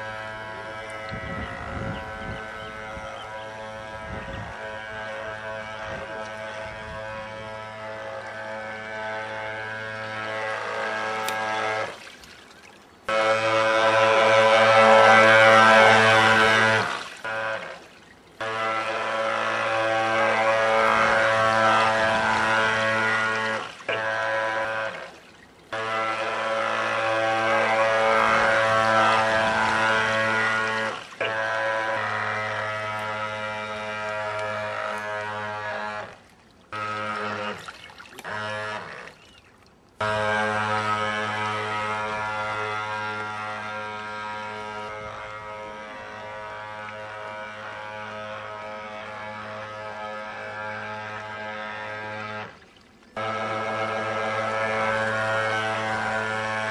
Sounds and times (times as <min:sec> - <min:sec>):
Motorboat, speedboat: 0:00.0 - 0:56.7.